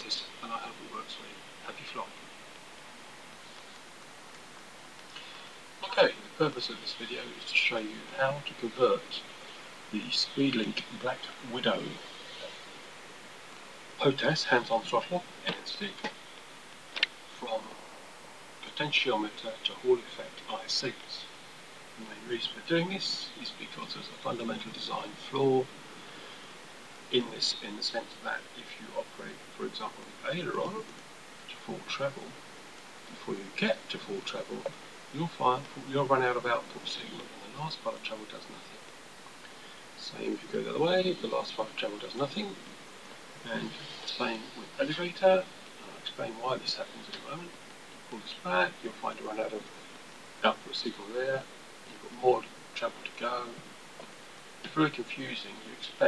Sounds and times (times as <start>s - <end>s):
Speech: 0.0s - 2.2s, 5.8s - 9.3s, 9.9s - 12.6s, 14.0s - 16.2s, 17.3s - 17.8s, 18.6s - 21.3s, 22.0s - 25.7s, 27.1s - 32.4s, 33.1s - 38.8s, 40.0s - 42.7s, 43.4s - 49.7s, 50.4s - 53.7s, 54.6s - 56.0s.